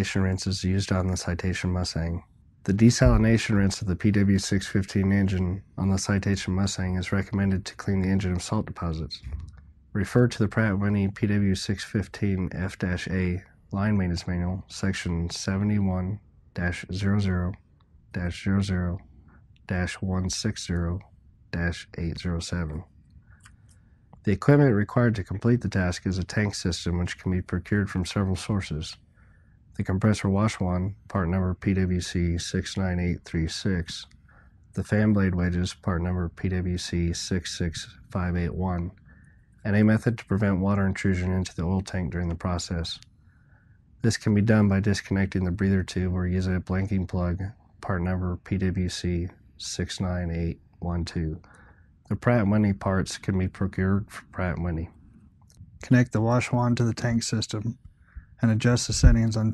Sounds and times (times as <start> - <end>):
Speech: 0.0 - 17.6, 18.2 - 19.0, 19.7 - 22.9, 24.2 - 29.0, 29.8 - 34.1, 34.8 - 43.0, 44.0 - 55.0, 55.8 - 59.5.